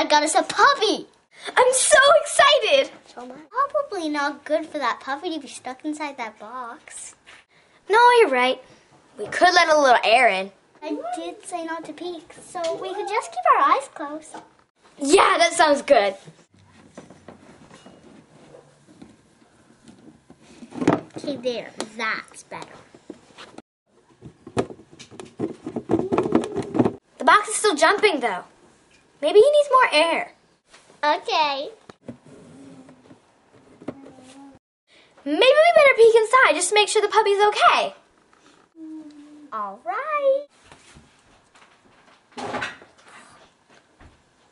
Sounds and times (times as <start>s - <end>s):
Child speech, kid speaking: 0.0s - 7.2s, 7.9s - 8.6s, 9.2s - 16.3s, 21.2s - 22.8s, 27.2s - 28.5s, 29.2s - 30.4s, 31.0s - 31.8s, 35.2s - 38.0s, 38.8s - 40.5s.